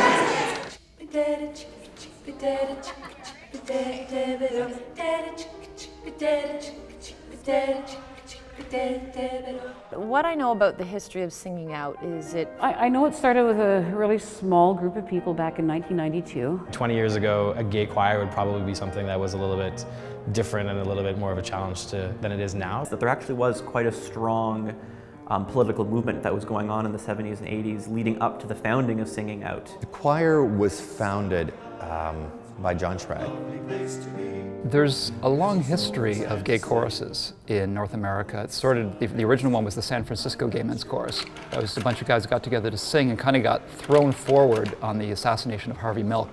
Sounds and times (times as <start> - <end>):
Choir: 0.0 - 10.1, 30.5 - 34.6
Female singing: 1.0 - 10.7.